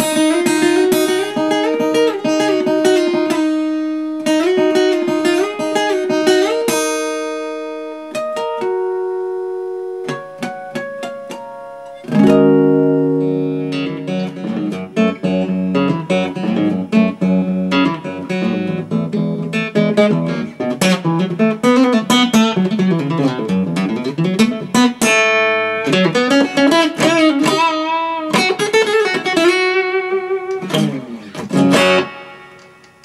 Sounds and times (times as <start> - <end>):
Acoustic guitar: 0.0 - 33.0.